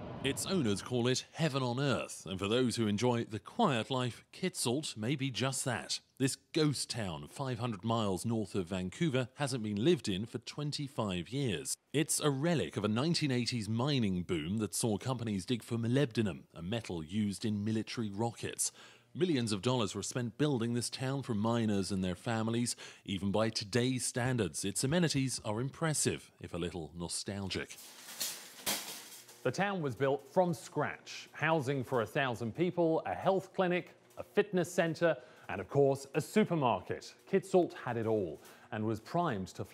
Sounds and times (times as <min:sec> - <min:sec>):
Speech: 0:00.2 - 0:27.8, 0:29.4 - 0:39.7.